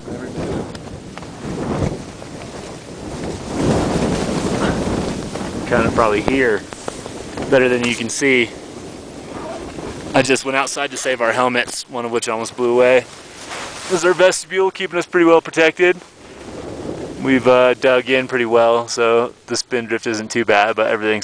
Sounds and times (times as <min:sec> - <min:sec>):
Speech: 0:05.7 - 0:06.7, 0:07.5 - 0:08.6, 0:09.3 - 0:13.1, 0:13.9 - 0:16.0, 0:17.2 - 0:21.2.